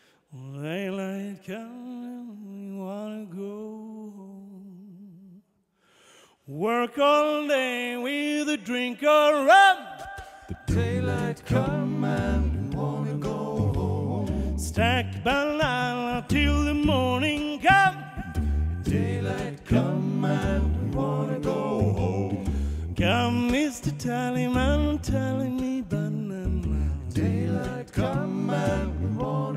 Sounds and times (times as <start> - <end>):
Music: 10.1 - 29.5.